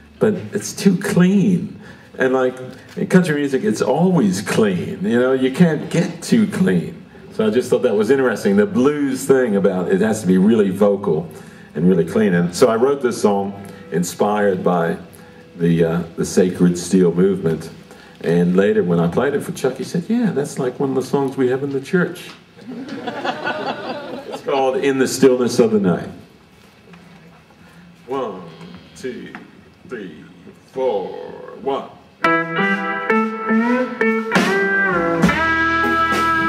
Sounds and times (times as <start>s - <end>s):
Speech: 0.2s - 22.4s, 24.4s - 26.3s, 28.1s - 32.0s.